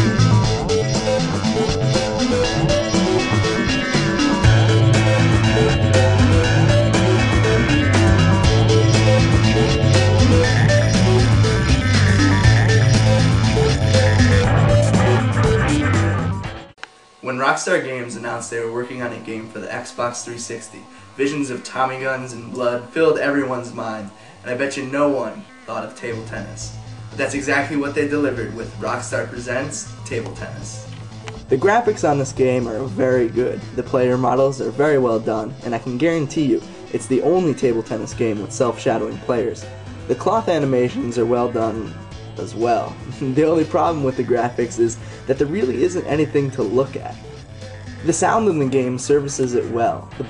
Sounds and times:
Music: 0:00.0 - 0:50.3
Speech: 0:17.2 - 0:30.8, 0:31.5 - 0:47.2, 0:48.0 - 0:50.3.

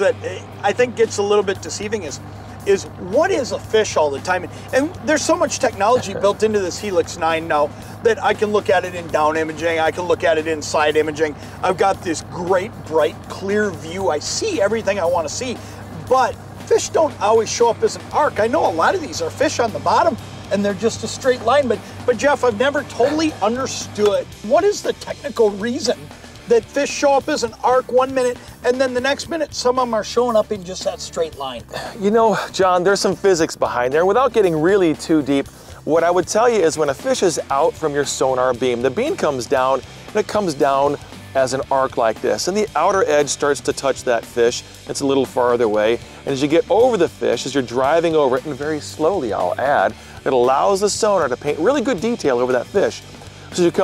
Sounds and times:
Speech: 0:00.0 - 0:53.8.

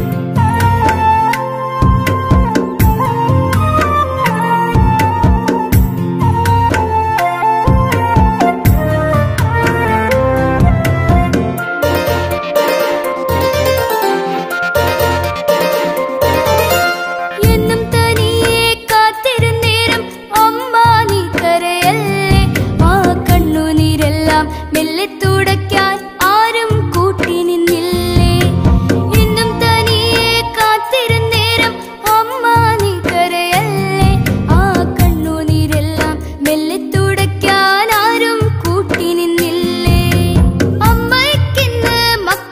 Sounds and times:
Music: 0:00.0 - 0:42.5.

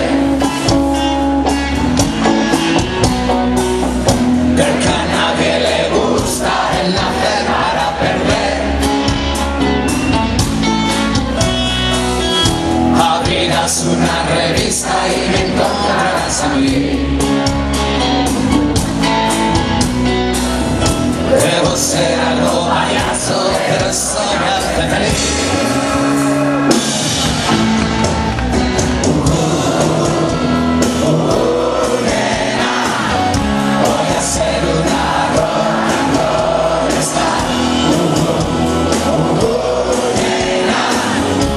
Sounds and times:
Music: 0:00.0 - 0:41.5.

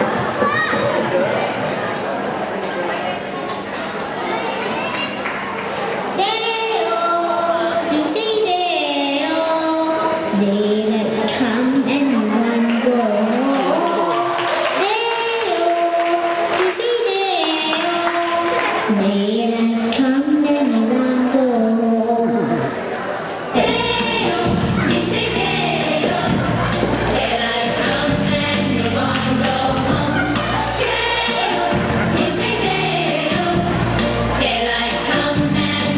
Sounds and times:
Music: 0:23.6 - 0:35.9.

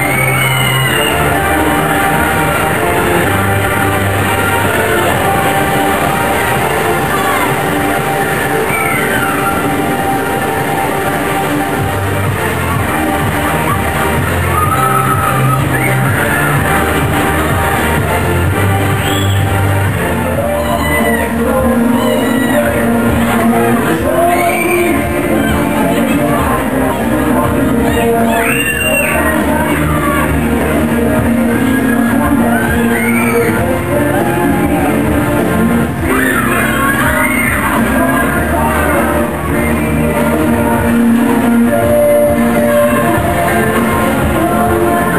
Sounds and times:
Music: 0:00.0 - 0:45.1.

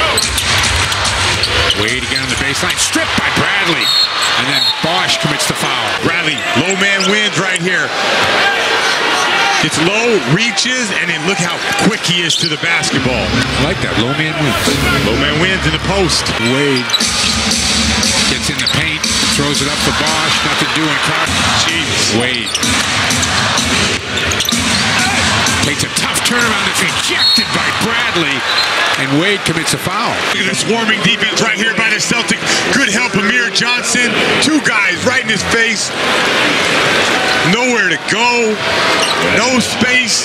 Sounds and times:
Speech: 0:01.8 - 0:07.9, 0:09.5 - 0:17.0, 0:18.2 - 0:22.6, 0:25.6 - 0:28.4, 0:29.0 - 0:35.9, 0:37.4 - 0:38.6, 0:39.2 - 0:40.2.

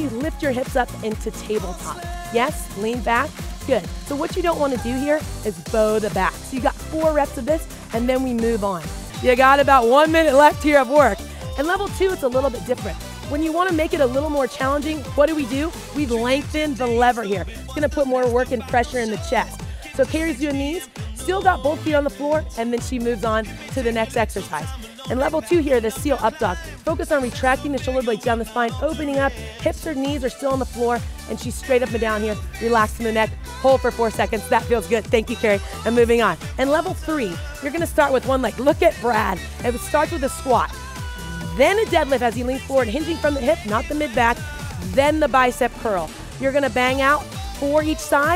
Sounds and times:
Speech: 0:00.0 - 0:40.7, 0:41.6 - 0:48.3
Music: 0:00.0 - 0:48.3.

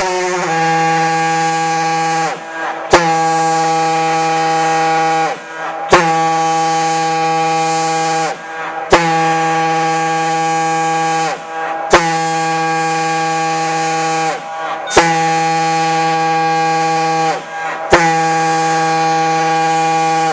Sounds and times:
Outside, rural or natural: 0:00.0 - 0:20.3.

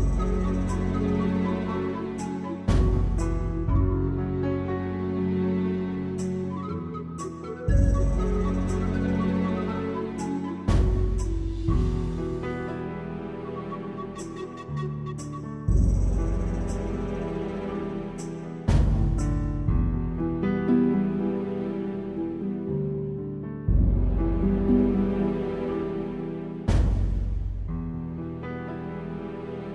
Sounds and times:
New-age music: 0:00.0 - 0:29.7.

